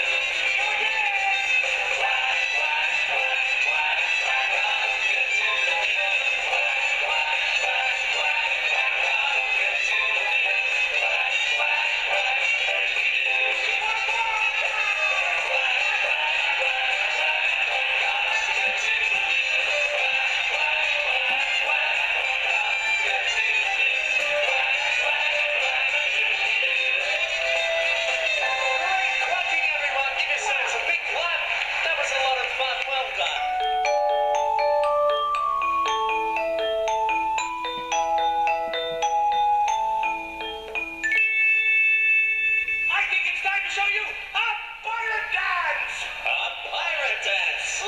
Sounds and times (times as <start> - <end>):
Music for children: 0.0 - 43.6
Speech: 13.7 - 15.4, 28.8 - 33.5, 42.9 - 47.8.